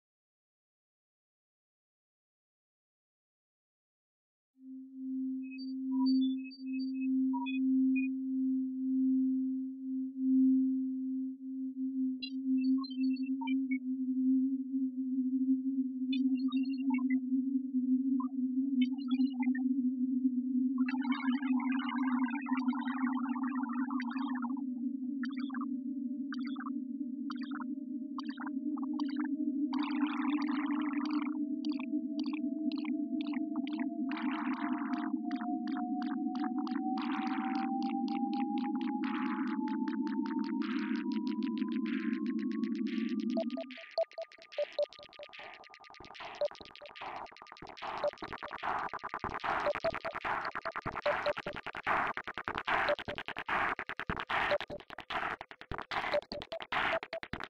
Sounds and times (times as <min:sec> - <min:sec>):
Sine wave: 0:04.6 - 0:51.6.